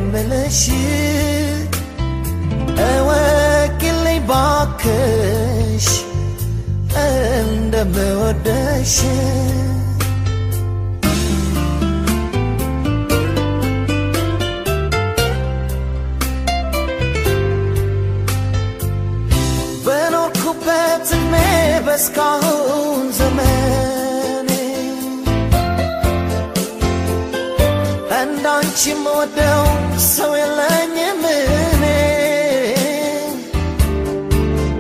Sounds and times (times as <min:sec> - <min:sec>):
Independent music: 0:00.0 - 0:34.8.